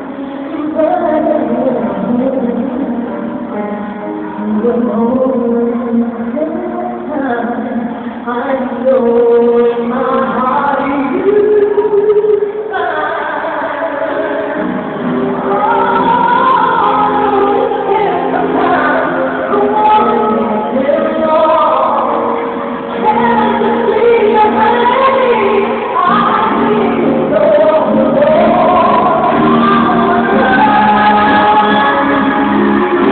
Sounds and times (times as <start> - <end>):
Music: 0.0 - 33.1.